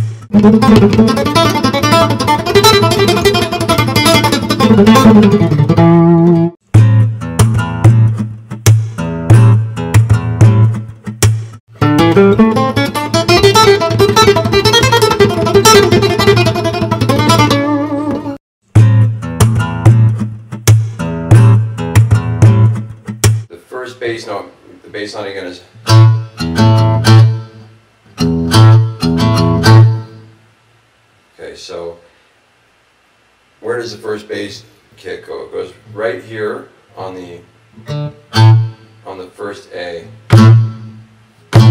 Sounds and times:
Guitar: 0.0s - 30.4s, 35.8s - 39.2s, 39.8s - 41.7s.

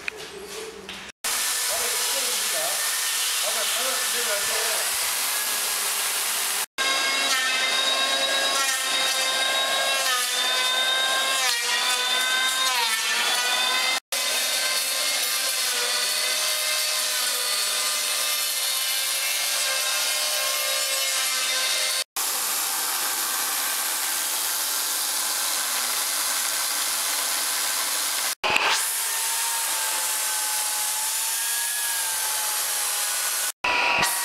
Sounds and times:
Chainsaw: 1.3s - 34.2s.

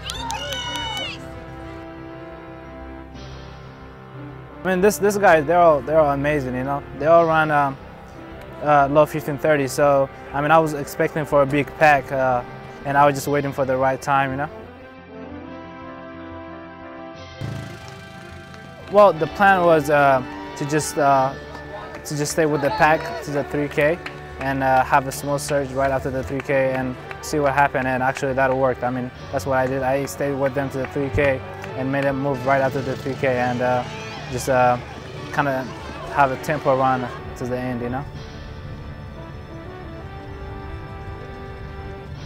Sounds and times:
Run: 0.0s - 1.6s, 20.2s - 27.3s, 29.5s - 37.3s, 40.1s - 42.2s
Music: 0.0s - 42.2s.

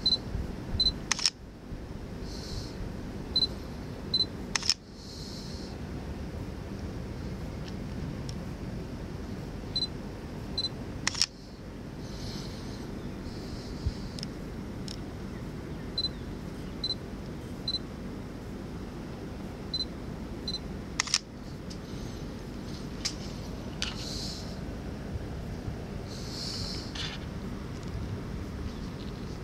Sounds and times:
Single-lens reflex camera: 1.1s - 1.4s, 4.6s - 4.8s, 11.1s - 11.4s, 21.0s - 21.3s.

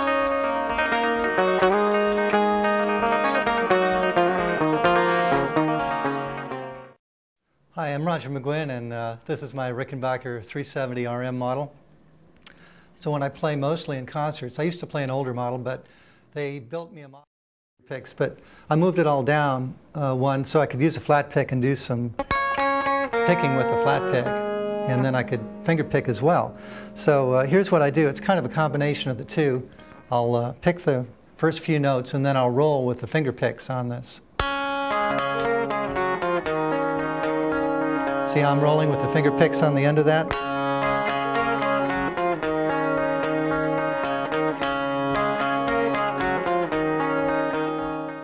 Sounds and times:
Strum: 0.0s - 7.0s, 22.2s - 30.5s, 34.4s - 48.2s
Speech: 7.8s - 11.8s, 13.0s - 15.8s, 16.4s - 22.2s, 23.2s - 34.3s, 38.3s - 40.3s.

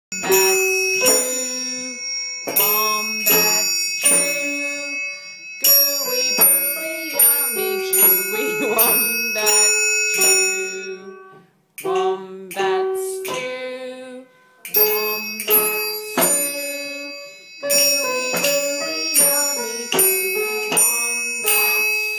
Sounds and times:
Musical instrument: 0.1s - 13.6s, 14.3s - 22.1s
Inside, small room: 0.1s - 22.1s.

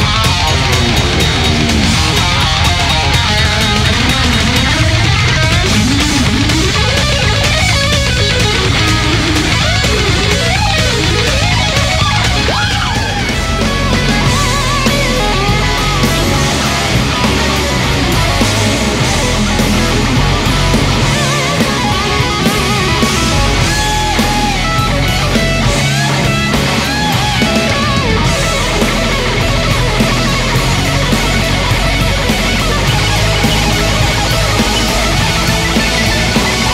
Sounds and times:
Electric guitar: 0.0s - 36.7s
Heavy metal: 0.0s - 36.7s.

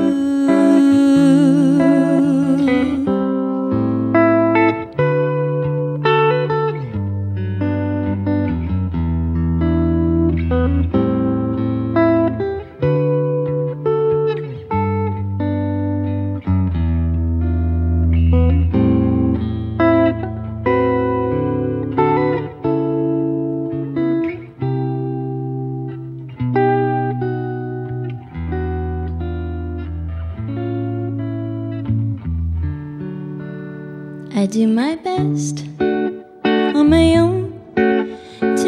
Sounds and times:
Inside, small room: 0.0s - 38.6s
Music: 0.0s - 38.6s.

